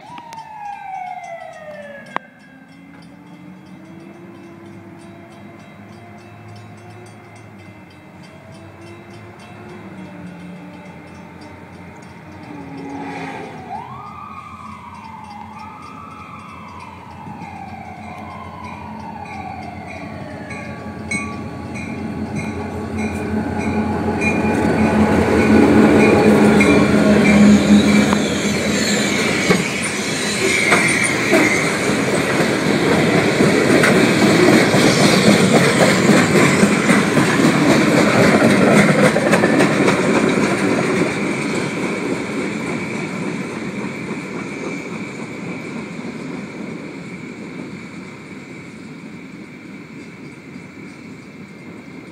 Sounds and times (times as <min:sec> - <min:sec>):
Railroad car, train wagon: 0:00.0 - 0:52.1
Train: 0:00.0 - 0:52.1.